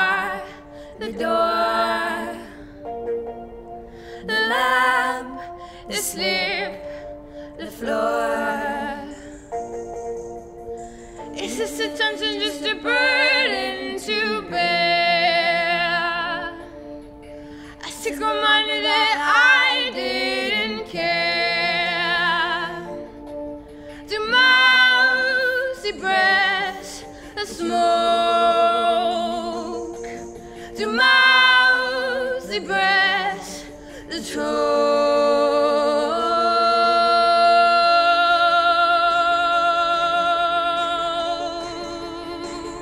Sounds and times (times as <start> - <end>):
Music: 0.0 - 42.8.